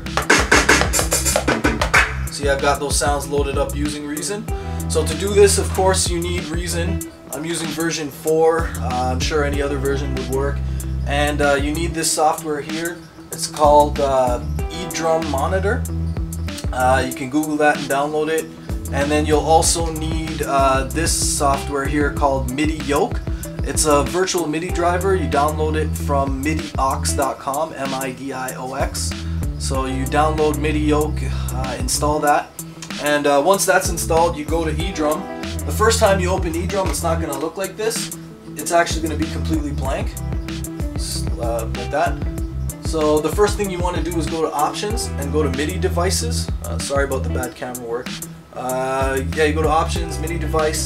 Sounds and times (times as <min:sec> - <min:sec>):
Speech: 0:02.3 - 0:15.8, 0:16.6 - 0:40.2, 0:41.0 - 0:42.3, 0:42.9 - 0:50.8.